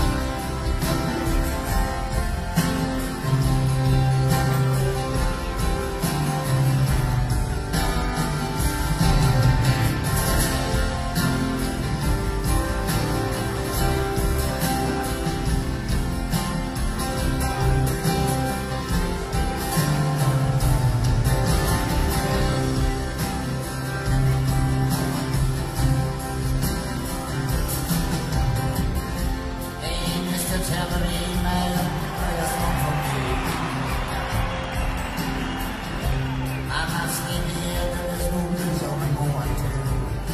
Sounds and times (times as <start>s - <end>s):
Musical instrument: 0.0s - 40.3s.